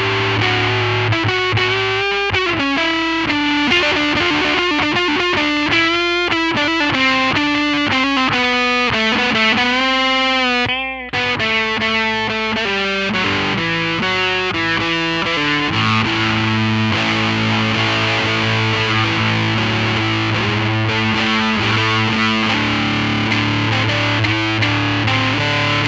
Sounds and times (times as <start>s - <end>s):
Distortion: 0.0s - 25.8s
Effects unit: 0.0s - 25.8s
Music: 0.0s - 25.8s.